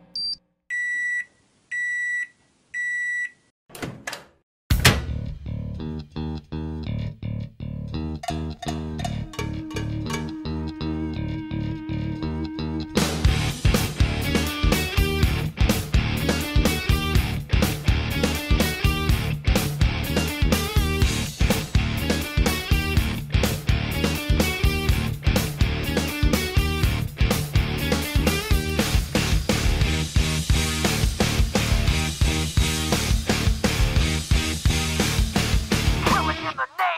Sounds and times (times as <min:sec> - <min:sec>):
Beep, bleep: 0:00.2 - 0:03.4
Music: 0:04.8 - 0:36.6.